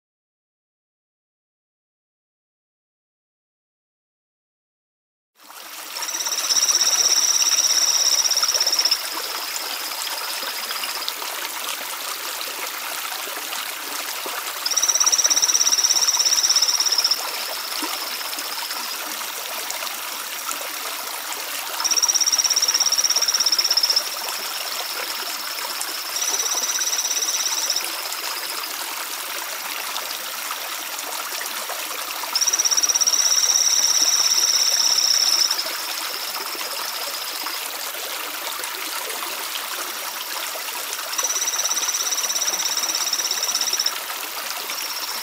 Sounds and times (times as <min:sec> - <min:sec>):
Frog: 0:05.5 - 0:45.2.